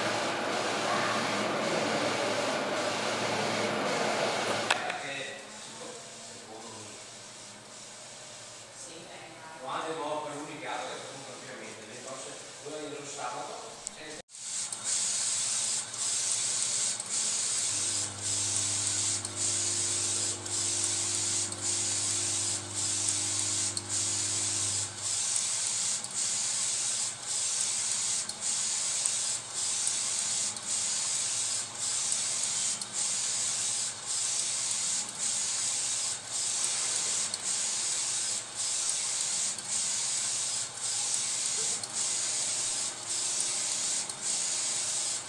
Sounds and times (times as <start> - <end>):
Printer: 0.0 - 9.0, 9.7 - 45.2.